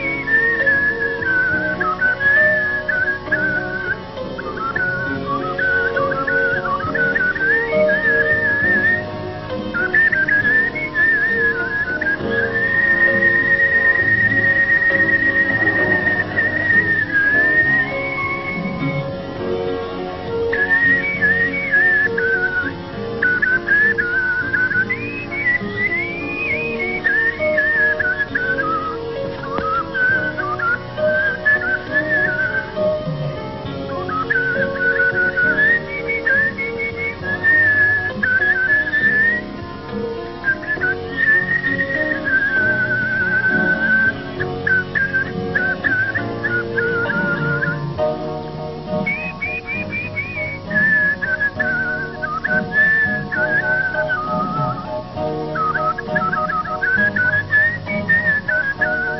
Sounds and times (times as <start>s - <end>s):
Music: 0.0s - 59.2s.